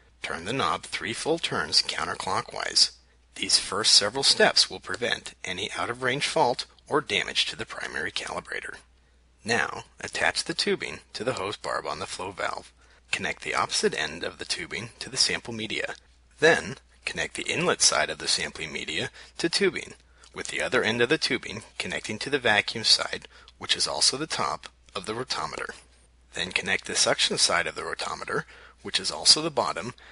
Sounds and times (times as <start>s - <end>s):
Speech: 0.2s - 30.1s.